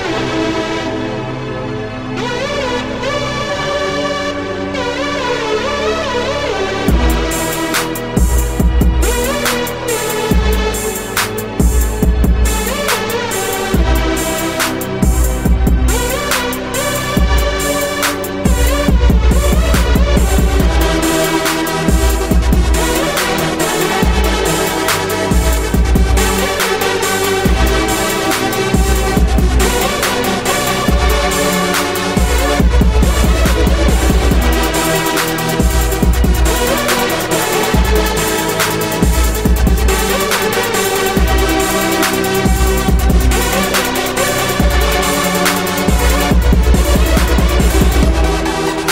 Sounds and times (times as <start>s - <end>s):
Music: 0.0s - 48.9s.